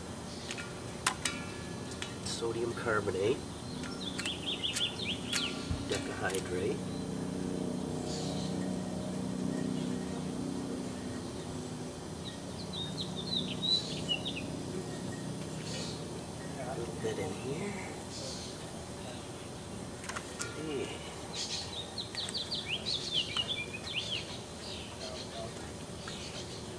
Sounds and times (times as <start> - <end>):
Outside, rural or natural: 0.0 - 26.7
Bird vocalization, bird call, bird song: 2.0 - 26.7.